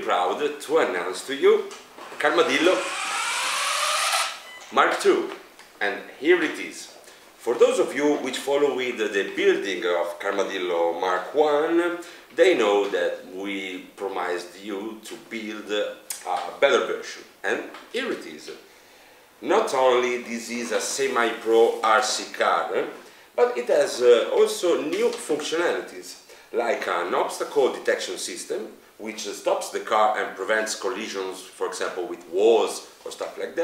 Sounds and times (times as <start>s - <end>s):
Speech: 0.0s - 2.8s, 4.7s - 18.6s, 19.4s - 33.6s.